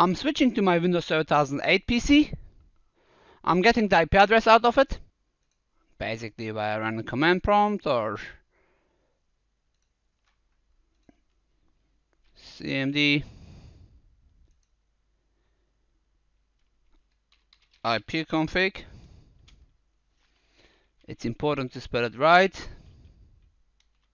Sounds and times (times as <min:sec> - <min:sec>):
Speech: 0:00.0 - 0:02.4, 0:03.4 - 0:05.0, 0:06.0 - 0:08.4, 0:12.4 - 0:13.3, 0:17.9 - 0:18.9, 0:21.1 - 0:22.8
Inside, small room: 0:00.0 - 0:24.1.